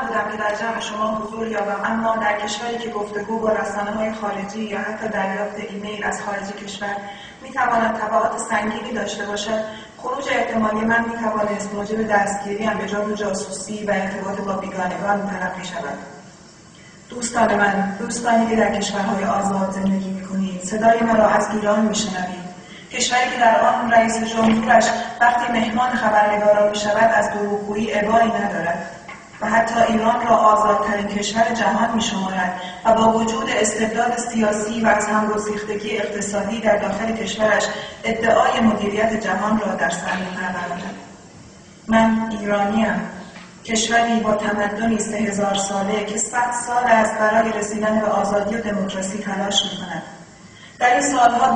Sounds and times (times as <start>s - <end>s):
Female speech, woman speaking: 0.0s - 16.2s, 17.1s - 41.0s, 41.9s - 50.2s, 50.8s - 51.5s.